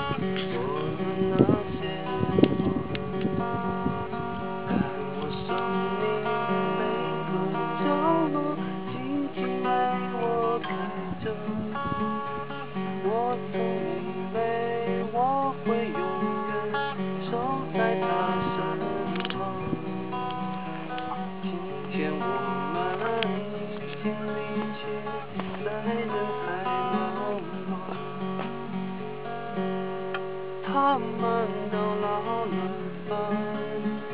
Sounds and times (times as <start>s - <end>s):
Music: 0.0s - 34.1s
Male singing: 0.4s - 2.2s, 4.7s - 11.9s, 13.0s - 20.0s, 21.0s - 28.2s, 30.7s - 34.1s.